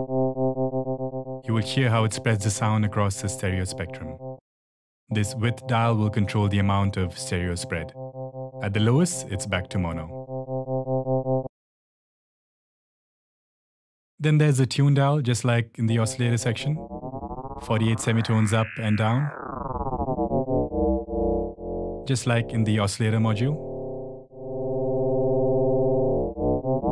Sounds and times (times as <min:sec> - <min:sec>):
Electronic tuner: 0:00.0 - 0:01.5, 0:07.6 - 0:09.0, 0:10.0 - 0:11.5, 0:16.4 - 0:26.9
Synthesizer: 0:00.0 - 0:04.4, 0:05.1 - 0:11.5, 0:16.1 - 0:26.9
Speech: 0:01.5 - 0:04.2, 0:05.1 - 0:07.9, 0:08.6 - 0:10.2, 0:14.2 - 0:16.8, 0:17.6 - 0:19.4, 0:22.1 - 0:23.6.